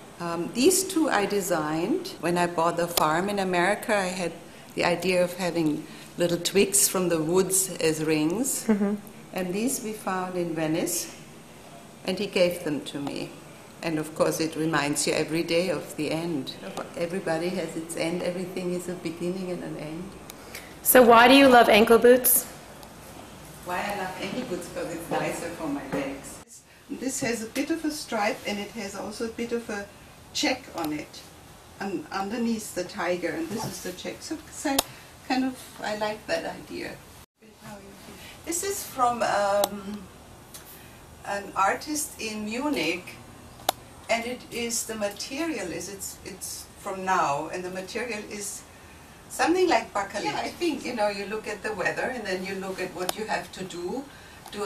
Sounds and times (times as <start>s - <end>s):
Inside, small room: 0.0s - 54.6s
Speech: 23.7s - 31.2s, 31.8s - 40.0s, 49.3s - 54.6s.